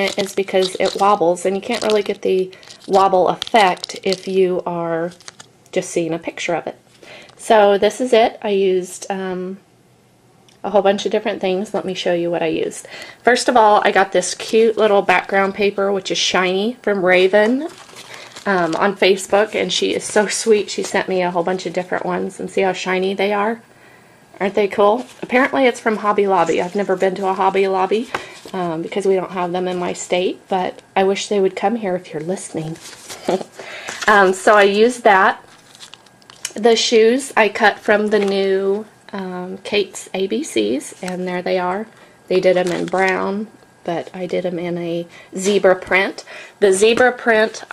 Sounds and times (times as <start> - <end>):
Speech: 0.0 - 6.8, 7.4 - 9.6, 10.6 - 17.8, 18.4 - 23.6, 24.4 - 33.4, 34.0 - 35.4, 36.5 - 47.7.